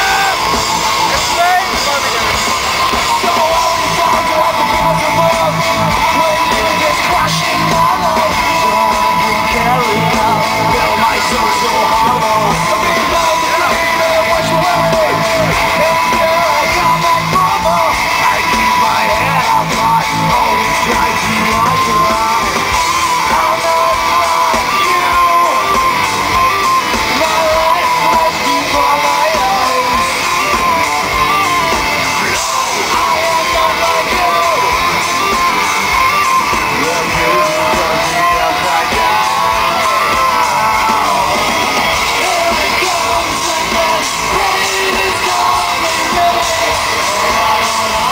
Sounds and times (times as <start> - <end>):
Music: 0.0 - 48.1.